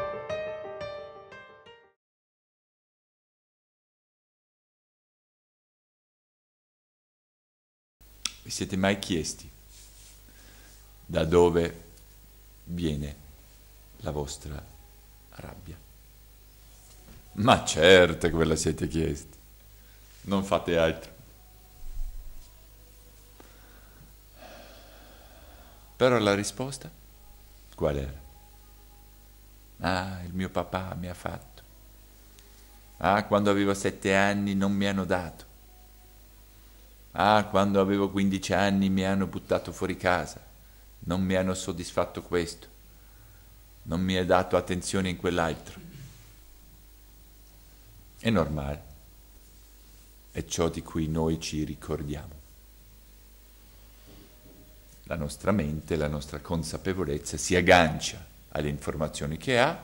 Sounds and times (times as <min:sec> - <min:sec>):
Speech: 0:08.4 - 0:09.6, 0:11.1 - 0:11.9, 0:12.7 - 0:13.3, 0:14.0 - 0:14.7, 0:15.3 - 0:15.9, 0:17.4 - 0:19.4, 0:20.2 - 0:21.2, 0:26.0 - 0:27.0, 0:27.8 - 0:28.3, 0:29.8 - 0:31.7, 0:33.0 - 0:35.5, 0:37.2 - 0:42.7, 0:43.9 - 0:46.1, 0:48.2 - 0:49.0, 0:50.3 - 0:52.4, 0:55.1 - 0:59.8.